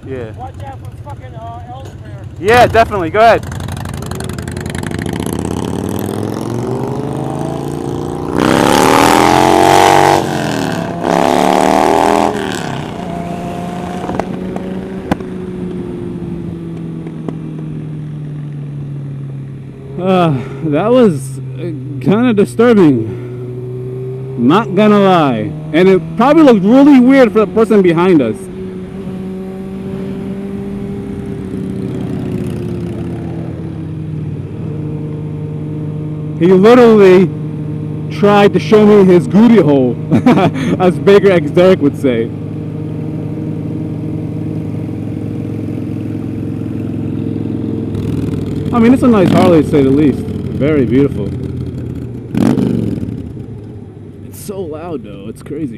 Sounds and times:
Speech: 0.0 - 3.4, 24.4 - 28.5, 36.4 - 37.3, 38.1 - 40.0, 40.8 - 42.3, 48.7 - 51.3, 54.2 - 55.7
Motorcycle: 0.0 - 55.7
Accelerating, revving, vroom: 3.8 - 15.2, 22.7 - 33.6, 34.6 - 51.1, 52.3 - 53.2.

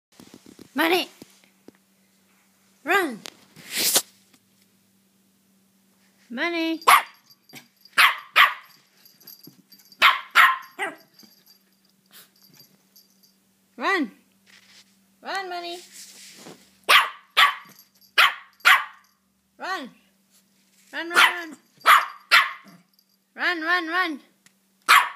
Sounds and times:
Speech: 0.7 - 1.2, 2.8 - 3.3, 6.3 - 6.9, 13.8 - 14.2, 15.2 - 15.9, 19.6 - 20.0, 20.9 - 21.6, 23.4 - 24.4
Bark: 6.9 - 8.8, 10.0 - 11.1, 16.9 - 19.1, 21.1 - 22.9, 24.9 - 25.1.

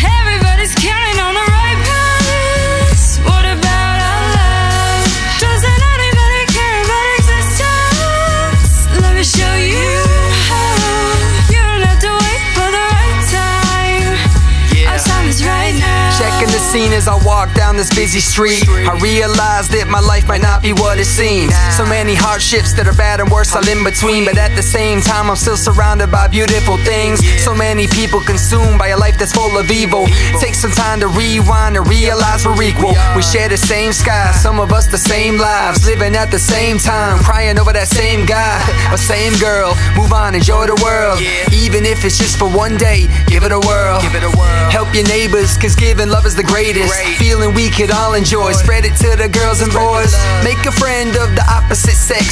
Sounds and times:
Background music: 0.0 - 52.3.

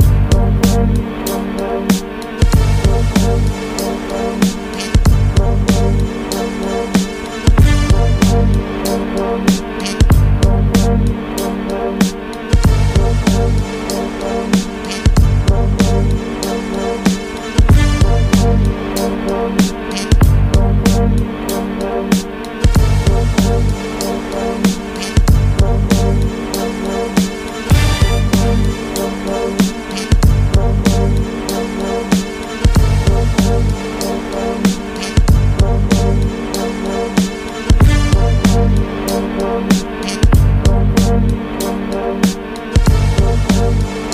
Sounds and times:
Music: 0.0 - 44.1.

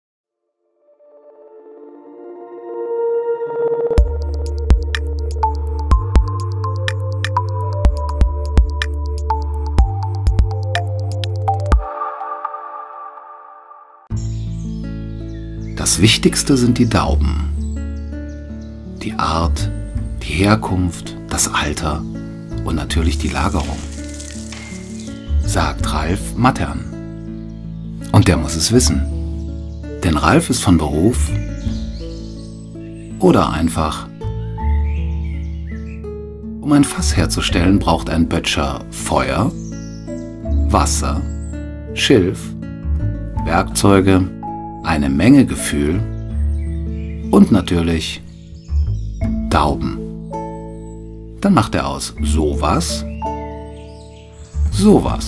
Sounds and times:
Music: 0.4 - 55.2.

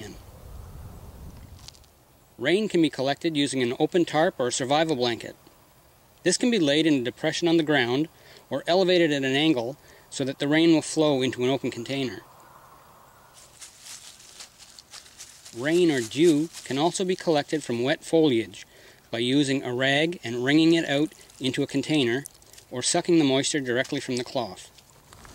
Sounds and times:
Speech: 0.0 - 0.2, 2.4 - 5.4, 6.2 - 12.2, 15.5 - 24.7
Outside, rural or natural: 0.0 - 25.3
Water: 21.0 - 24.2.

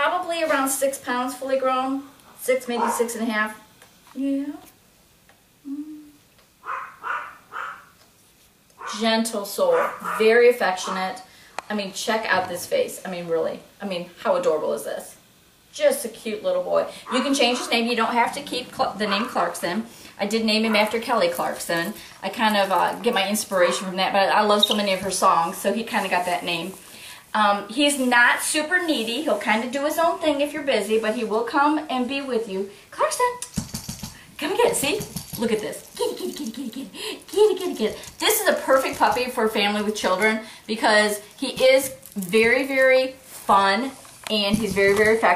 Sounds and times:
Speech: 0.0 - 3.6, 8.9 - 26.8, 27.4 - 33.4, 34.4 - 45.3.

